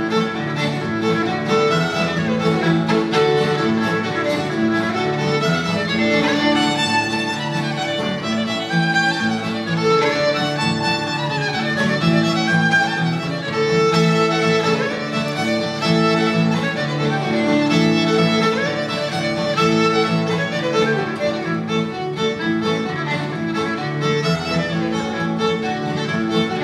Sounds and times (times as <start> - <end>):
Violin, fiddle: 0.0 - 26.6.